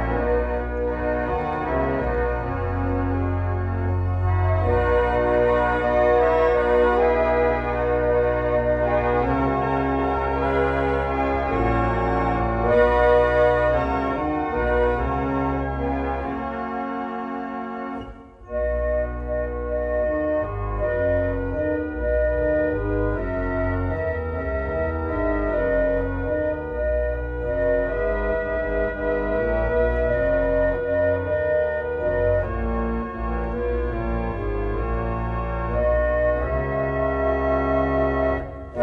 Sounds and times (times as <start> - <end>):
Classical music: 0.0 - 38.8
Piano: 0.0 - 38.8.